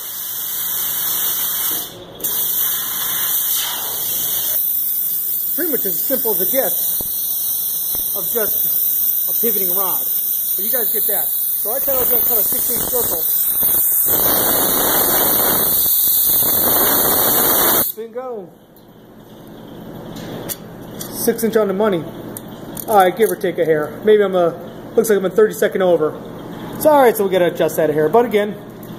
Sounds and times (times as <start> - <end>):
Speech: 5.6 - 6.8, 8.2 - 8.6, 9.3 - 13.3, 18.0 - 18.6, 21.1 - 22.1, 22.8 - 26.2, 26.8 - 28.6.